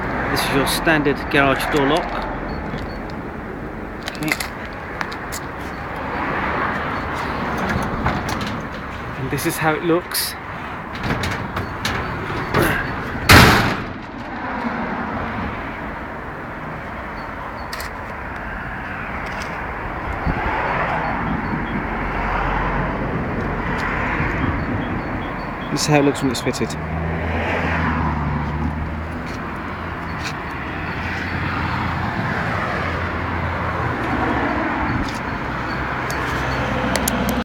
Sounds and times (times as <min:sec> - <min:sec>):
Car: 0:00.0 - 0:37.4.